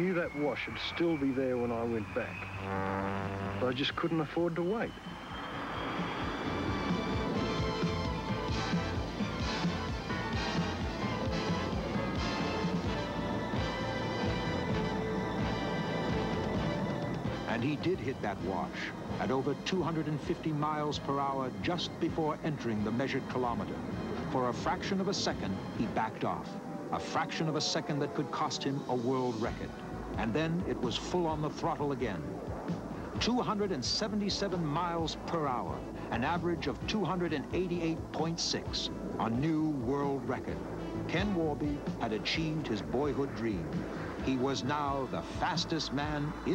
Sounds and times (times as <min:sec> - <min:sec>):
Speech: 0:00.0 - 0:02.4, 0:03.6 - 0:04.9, 0:17.5 - 0:32.3, 0:33.2 - 0:46.5
Music: 0:00.0 - 0:46.5.